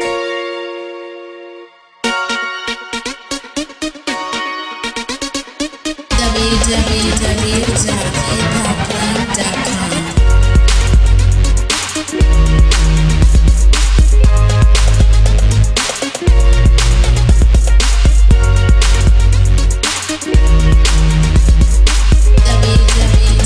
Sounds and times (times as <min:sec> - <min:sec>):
Music: 0:00.0 - 0:23.4
Speech: 0:06.1 - 0:10.2, 0:22.4 - 0:23.4.